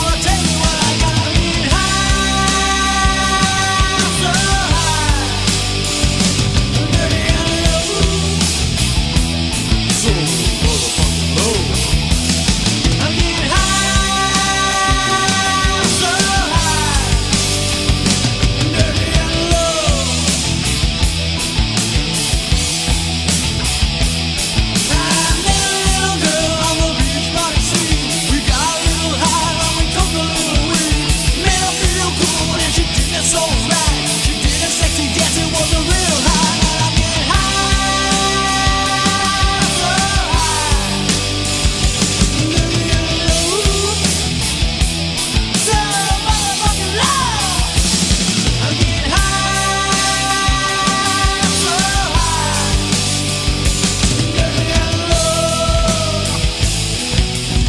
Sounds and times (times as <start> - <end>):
Independent music: 0.0 - 57.6
Progressive rock: 0.0 - 57.6
Rock and roll: 0.0 - 57.6.